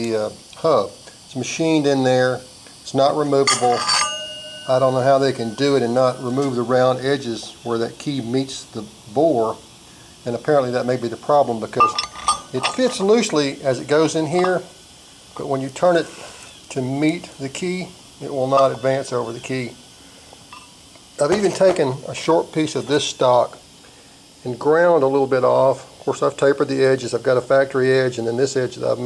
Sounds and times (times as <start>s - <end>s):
Speech: 0.0s - 3.9s, 4.7s - 9.6s, 10.2s - 14.7s, 15.4s - 19.8s, 21.2s - 23.6s, 24.4s - 29.0s.